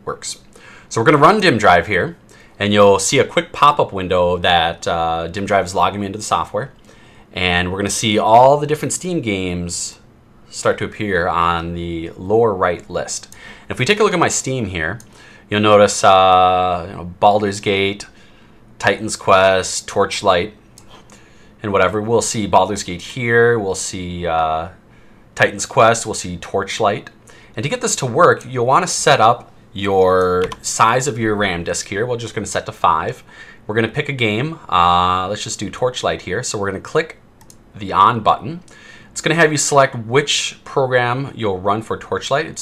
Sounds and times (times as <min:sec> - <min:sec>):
Speech: 0:00.0 - 0:18.2, 0:18.8 - 0:20.6, 0:21.6 - 0:24.8, 0:25.4 - 0:42.6.